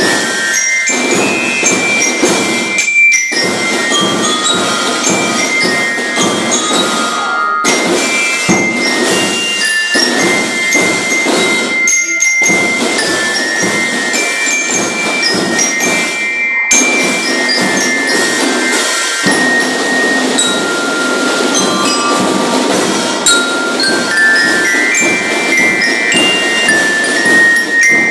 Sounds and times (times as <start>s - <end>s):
Jingle bell: 0.0s - 28.1s.